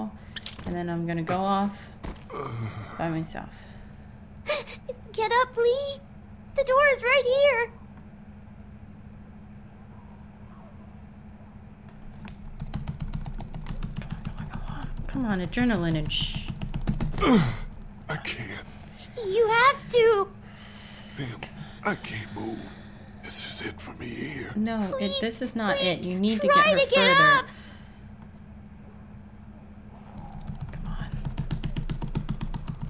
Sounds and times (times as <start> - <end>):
Computer keyboard: 11.9 - 17.2, 30.0 - 32.8.